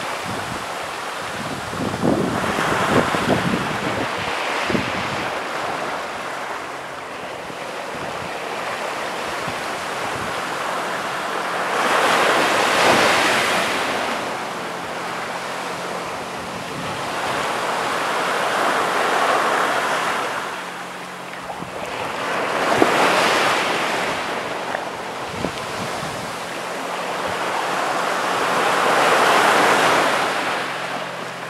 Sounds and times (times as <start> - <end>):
Wind noise (microphone): 0.0 - 6.0, 7.4 - 10.6, 16.4 - 17.6, 21.4 - 26.6
Waves, surf: 0.0 - 31.5.